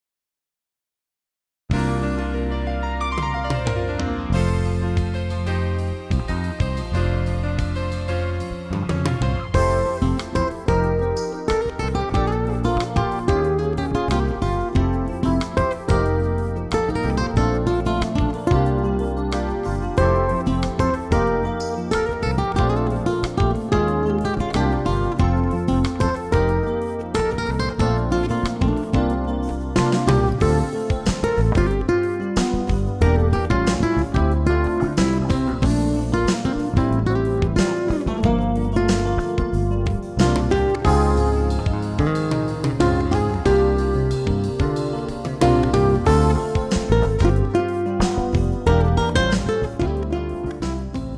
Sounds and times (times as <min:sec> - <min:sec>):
Music: 0:01.7 - 0:51.1.